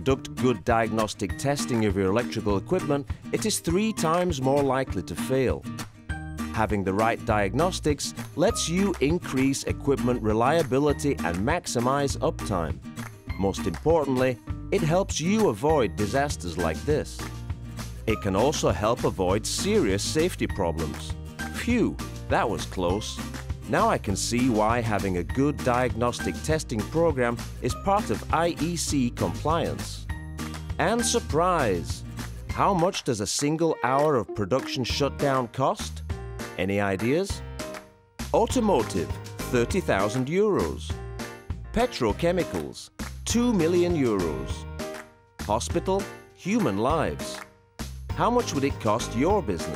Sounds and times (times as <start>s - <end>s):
Speech: 0.0s - 5.7s, 6.6s - 12.8s, 13.4s - 17.2s, 18.1s - 30.0s, 30.8s - 36.0s, 36.6s - 37.4s, 38.4s - 41.0s, 41.8s - 44.6s, 45.5s - 47.4s, 48.1s - 49.7s
Music: 0.0s - 49.7s.